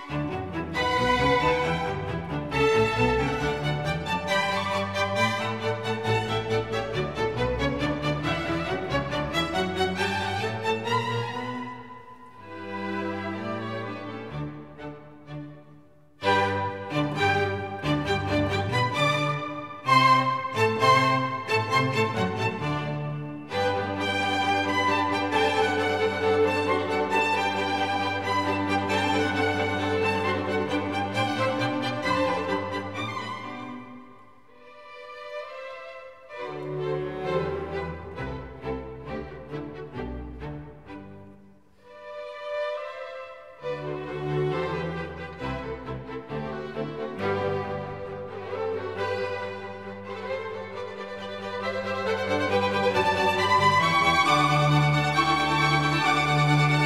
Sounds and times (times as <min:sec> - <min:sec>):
Music: 0:00.0 - 0:56.8.